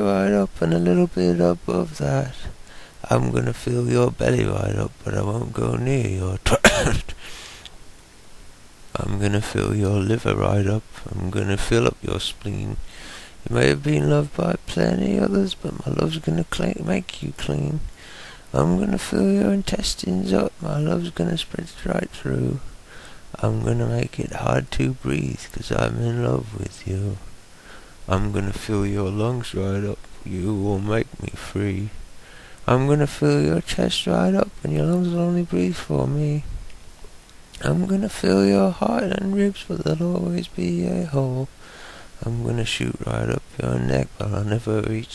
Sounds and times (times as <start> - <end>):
Speech: 0.0 - 7.1, 9.0 - 12.8, 13.5 - 17.9, 18.5 - 22.7, 23.4 - 27.2, 28.1 - 32.0, 32.7 - 36.5, 37.6 - 41.5, 42.2 - 45.1.